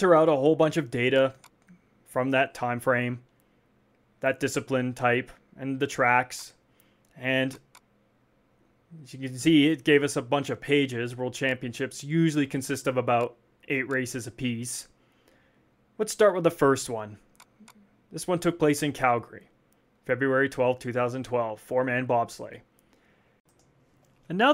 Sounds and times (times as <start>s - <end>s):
Speech: 0.0s - 1.4s, 2.1s - 3.3s, 4.2s - 6.6s, 7.2s - 7.6s, 9.0s - 15.0s, 16.0s - 17.2s, 18.1s - 22.7s, 24.3s - 24.5s.